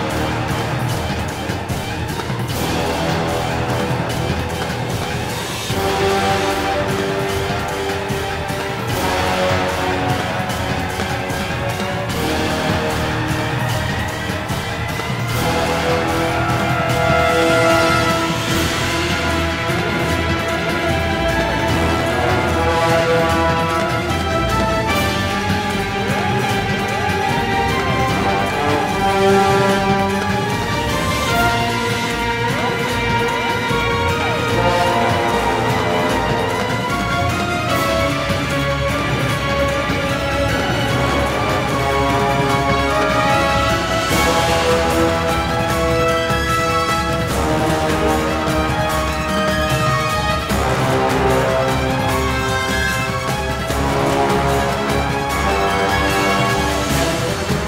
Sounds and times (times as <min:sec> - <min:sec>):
Background music: 0:00.0 - 0:57.6
Scary music: 0:00.0 - 0:57.6.